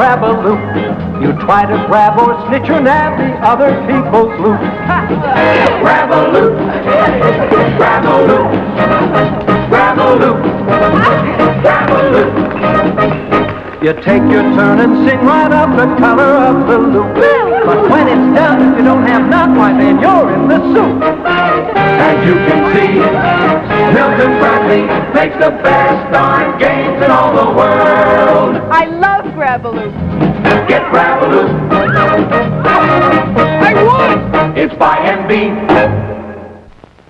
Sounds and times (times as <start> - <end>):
Music: 0.0 - 36.8.